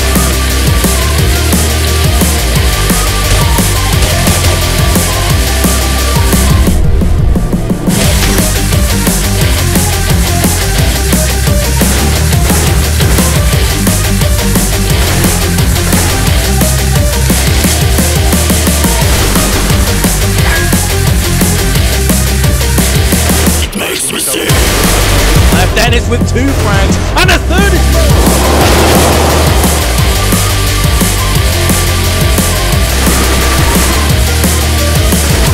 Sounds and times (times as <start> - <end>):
Music: 0.0 - 35.5.